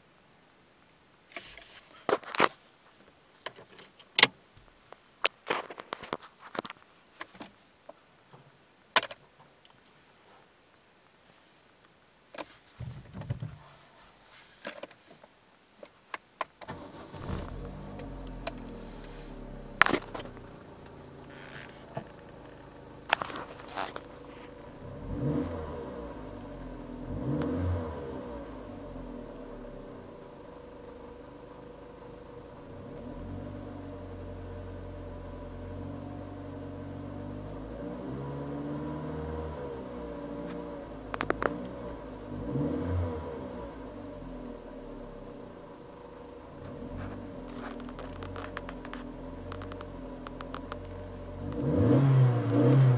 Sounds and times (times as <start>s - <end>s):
Vehicle: 16.6s - 52.9s
Accelerating, revving, vroom: 24.8s - 29.1s, 36.9s - 44.5s, 51.4s - 52.9s.